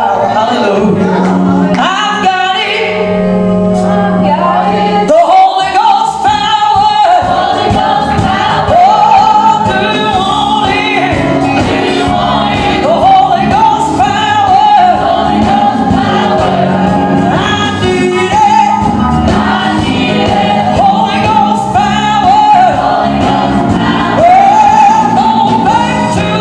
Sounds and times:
Choir: 0.0 - 2.4, 3.7 - 26.4
Male singing: 0.0 - 3.0, 17.4 - 19.0.

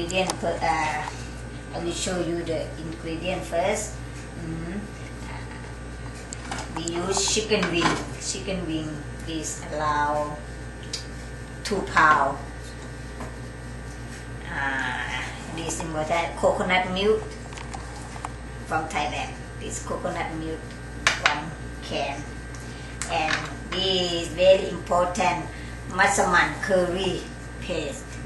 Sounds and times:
Speech: 0.0 - 1.1, 1.7 - 4.9, 6.8 - 10.4, 11.6 - 12.5, 14.4 - 17.3, 18.7 - 22.3, 23.0 - 28.0.

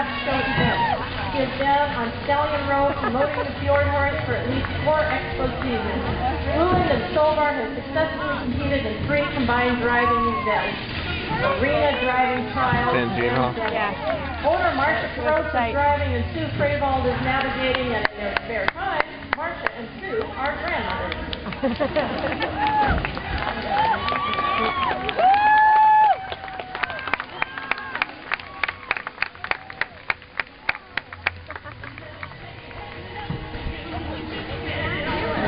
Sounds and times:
Music: 0.0 - 35.4.

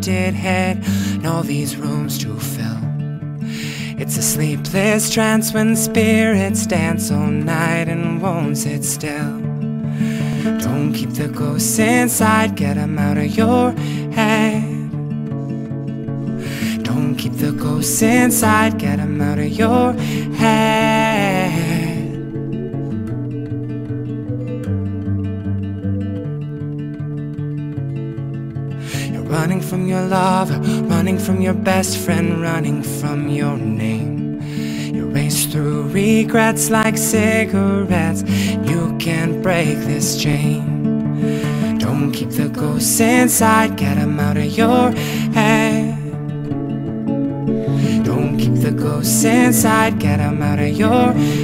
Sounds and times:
Music: 0.0 - 51.4.

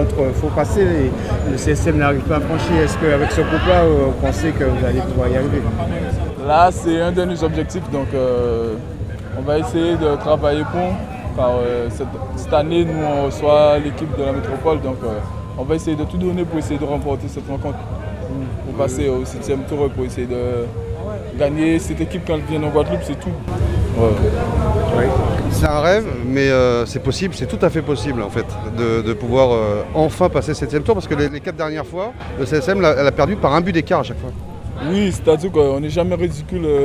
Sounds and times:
Speech: 0.0 - 20.7, 21.4 - 36.8.

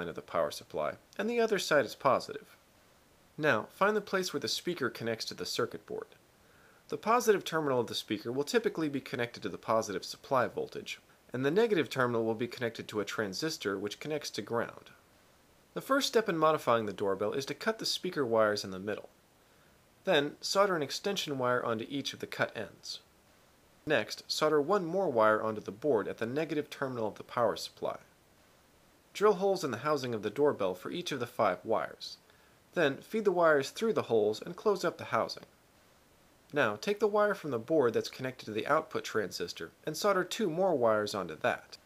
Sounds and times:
Narration, monologue: 0.0 - 41.8.

